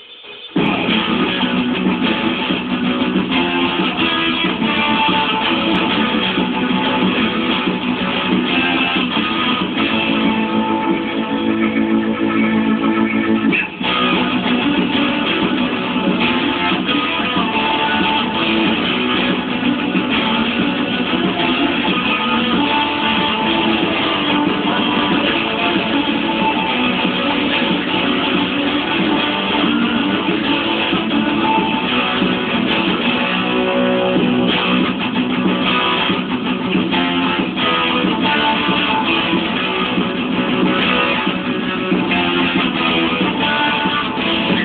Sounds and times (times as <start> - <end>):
Guitar: 0.0 - 44.6.